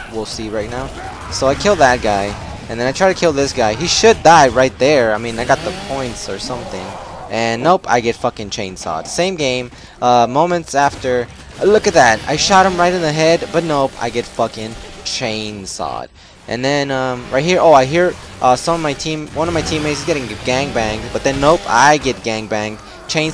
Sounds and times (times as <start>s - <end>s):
Speech: 0.0s - 23.3s.